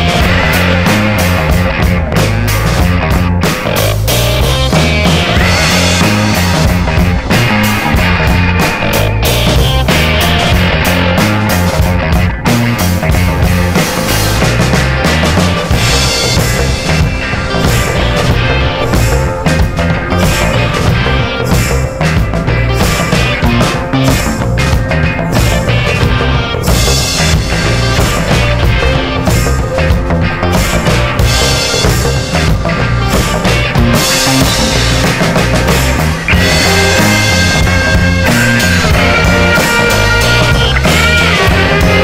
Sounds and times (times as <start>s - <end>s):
Jazz: 0.0s - 42.0s.